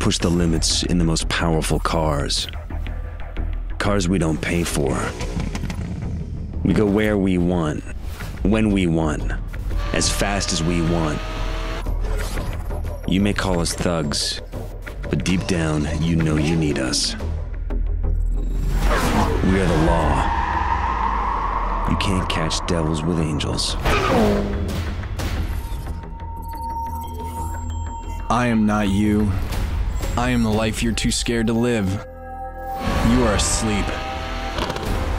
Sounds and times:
Car: 0:09.7 - 0:11.9, 0:18.7 - 0:25.2, 0:32.8 - 0:35.1.

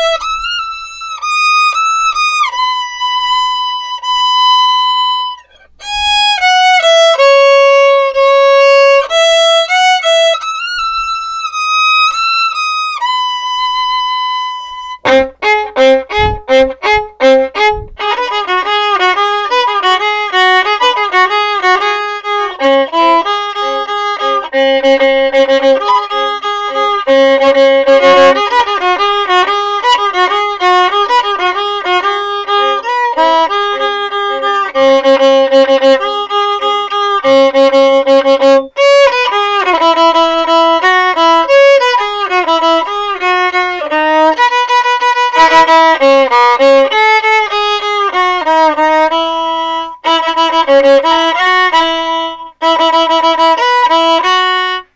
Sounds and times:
Violin, fiddle: 0:00.0 - 0:54.9.

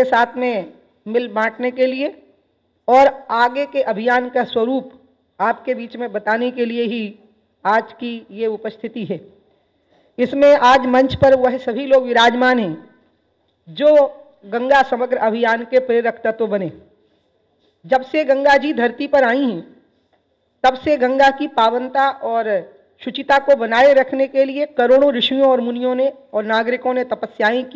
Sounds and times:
Female speech, woman speaking: 0:00.0 - 0:02.2, 0:02.9 - 0:09.3, 0:10.2 - 0:12.9, 0:13.7 - 0:16.8, 0:17.9 - 0:19.7, 0:20.6 - 0:27.7
Narration, monologue: 0:00.0 - 0:27.7.

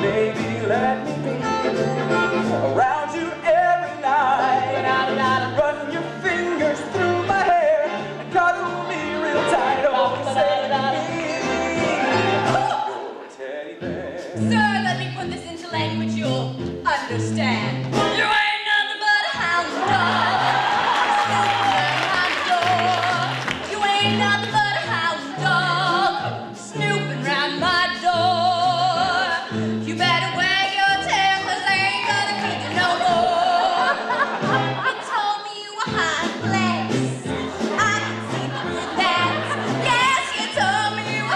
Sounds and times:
Music: 0:00.0 - 0:41.3.

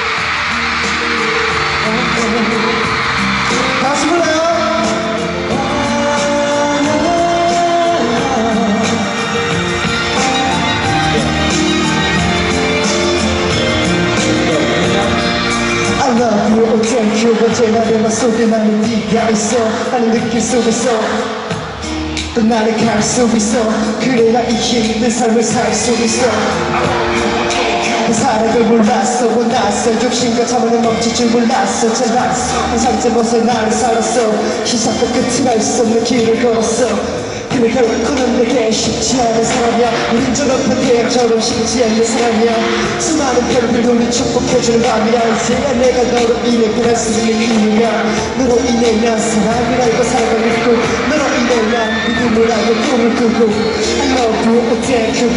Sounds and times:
Music: 0:00.0 - 0:55.3
Male singing: 0:01.4 - 0:09.4, 0:14.1 - 0:21.5, 0:22.3 - 0:55.3.

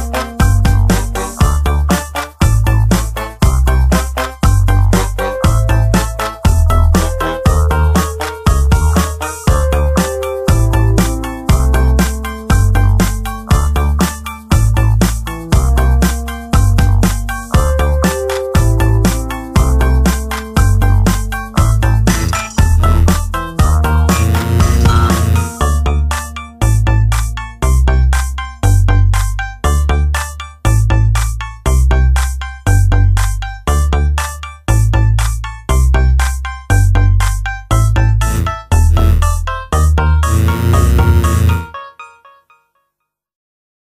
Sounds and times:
Music: 0:00.0 - 0:43.0.

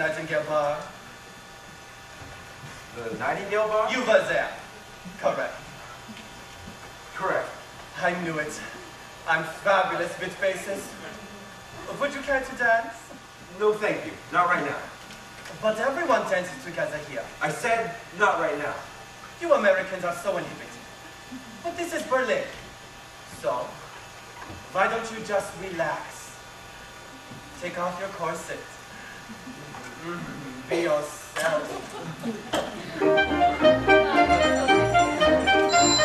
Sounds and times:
Speech: 0:00.0 - 0:01.0, 0:03.0 - 0:05.6, 0:07.2 - 0:15.0, 0:15.6 - 0:20.8, 0:21.7 - 0:22.6, 0:23.3 - 0:23.9, 0:24.7 - 0:26.4, 0:27.6 - 0:28.8, 0:30.0 - 0:32.0.

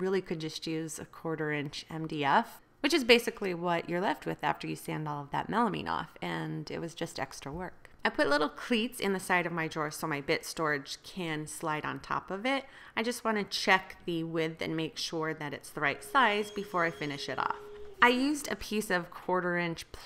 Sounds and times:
Speech: 0:00.0 - 0:20.0.

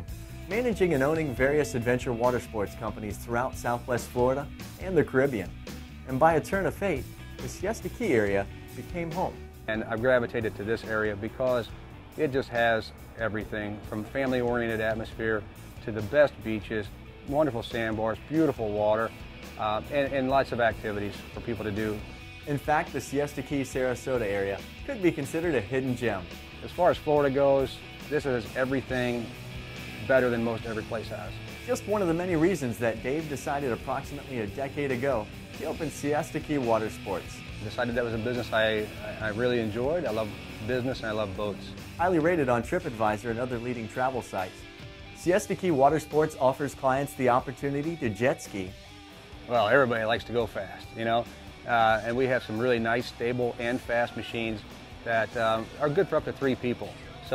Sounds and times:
Speech: 0:00.0 - 0:05.5, 0:06.1 - 0:29.3, 0:30.0 - 0:44.5, 0:45.2 - 0:48.7, 0:49.5 - 0:57.3
Music: 0:00.0 - 0:57.3.

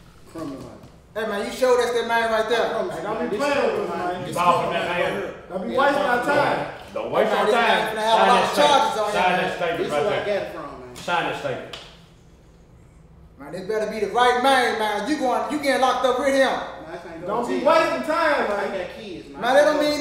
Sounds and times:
Speech: 0:00.3 - 0:11.7, 0:13.4 - 0:20.0.

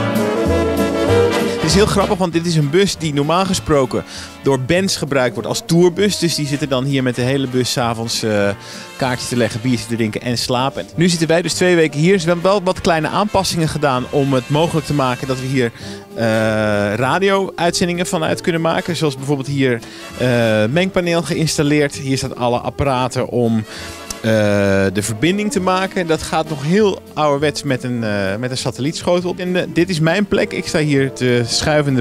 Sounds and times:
Music: 0:00.0 - 0:32.0
Speech: 0:01.6 - 0:32.0.

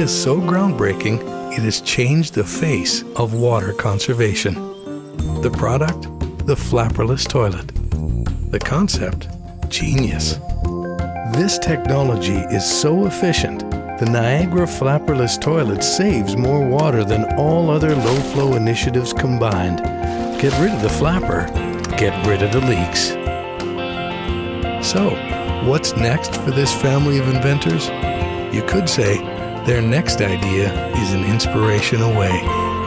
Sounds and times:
Speech: 0:00.0 - 0:04.6, 0:05.3 - 0:07.8, 0:08.5 - 0:10.4, 0:11.3 - 0:23.2, 0:24.8 - 0:32.5
Music: 0:00.0 - 0:32.8.

